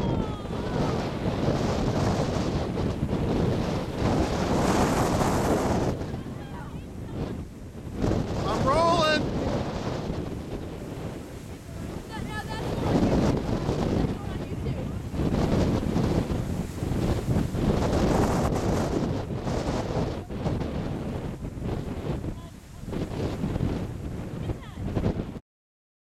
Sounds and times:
Speech: 0:00.0 - 0:01.1, 0:06.1 - 0:07.2, 0:08.4 - 0:09.2, 0:11.7 - 0:13.3, 0:13.9 - 0:15.0, 0:22.3 - 0:23.0, 0:24.4 - 0:24.9.

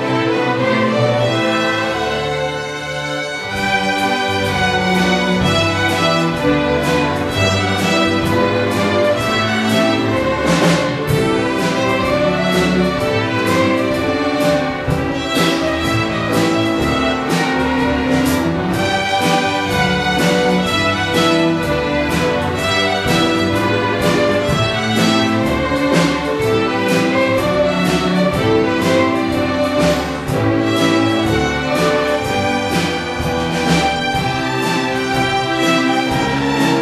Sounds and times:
Music: 0:00.0 - 0:36.8.

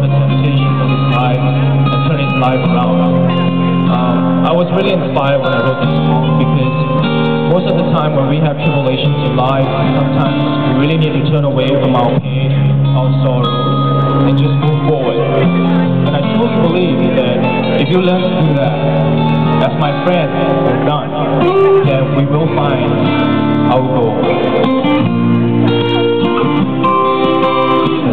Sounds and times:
Speech: 0:00.0 - 0:03.2, 0:03.9 - 0:13.6, 0:14.2 - 0:15.5, 0:16.1 - 0:19.0, 0:19.6 - 0:23.0, 0:23.7 - 0:24.4
Music: 0:00.0 - 0:28.1.

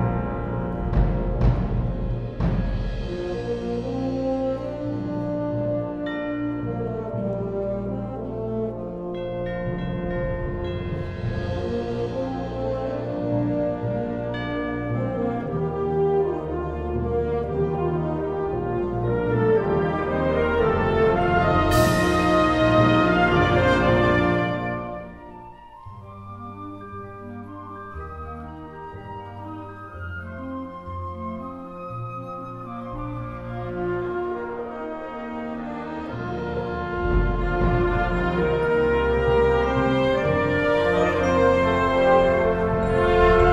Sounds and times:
Music: 0:00.0 - 0:43.5.

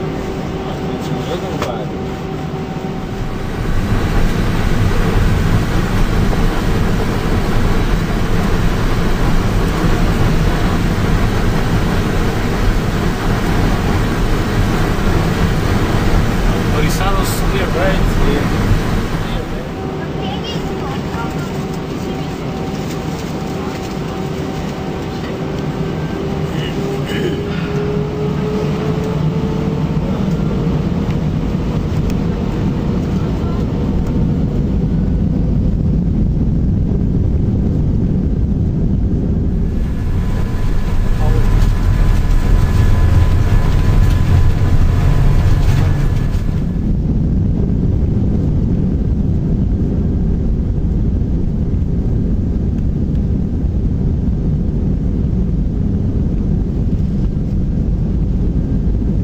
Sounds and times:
Fixed-wing aircraft, airplane: 0:00.0 - 0:59.2.

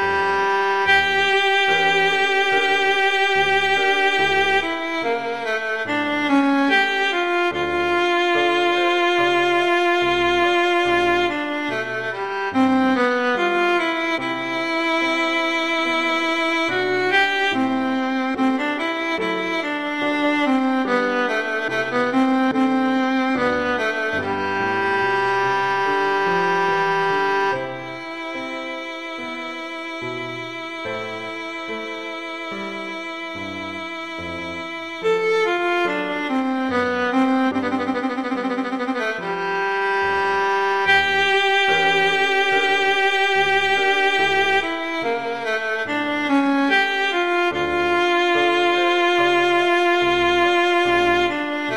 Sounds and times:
Violin, fiddle: 0:00.0 - 0:51.7.

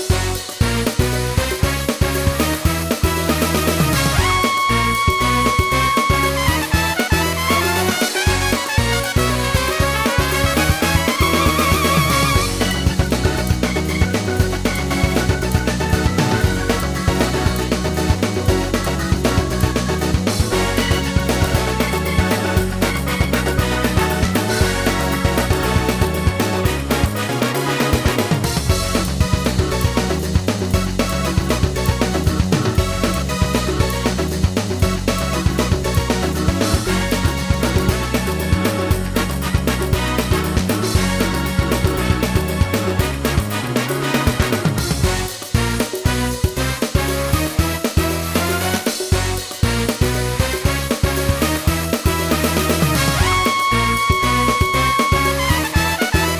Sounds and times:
Music: 0:00.0 - 0:56.3.

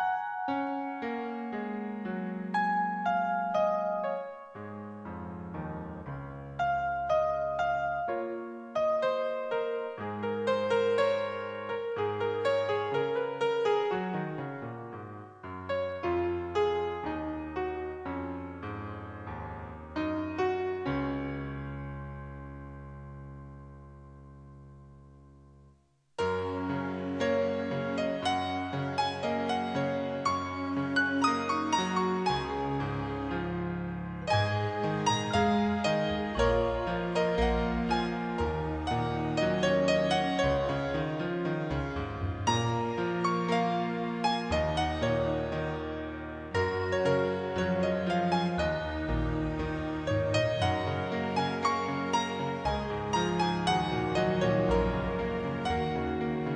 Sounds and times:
Tender music: 0:00.0 - 0:24.6, 0:26.2 - 0:56.5.

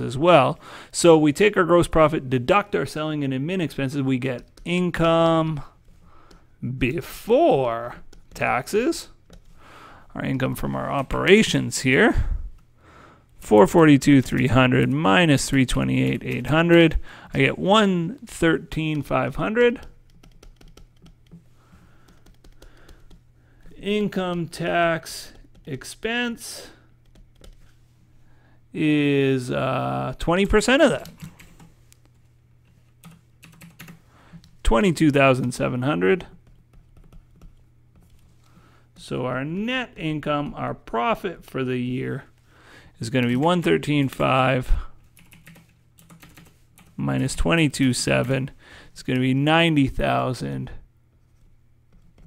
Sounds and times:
Speech: 0:00.0 - 0:05.8, 0:06.6 - 0:09.2, 0:10.2 - 0:12.4, 0:13.4 - 0:19.9, 0:23.7 - 0:26.8, 0:28.7 - 0:31.2, 0:34.6 - 0:36.4, 0:39.0 - 0:42.3, 0:43.0 - 0:44.9, 0:47.0 - 0:50.9
Computer keyboard: 0:04.4 - 0:04.7, 0:19.7 - 0:21.4, 0:22.0 - 0:23.2, 0:27.0 - 0:27.7, 0:30.9 - 0:31.7, 0:33.0 - 0:34.6, 0:36.4 - 0:38.3, 0:45.1 - 0:47.0, 0:51.9 - 0:52.2.

